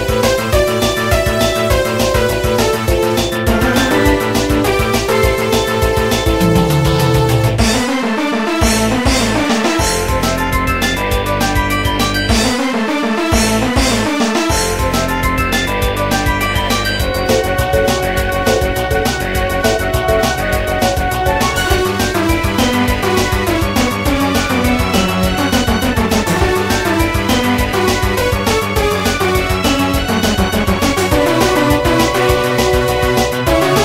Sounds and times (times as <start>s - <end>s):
Music: 0.0s - 33.8s.